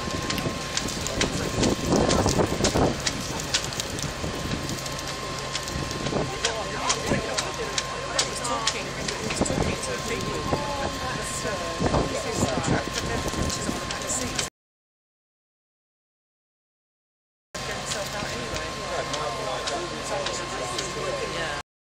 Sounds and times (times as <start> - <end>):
Speech: 0.5 - 4.1, 5.0 - 14.5, 17.6 - 21.6.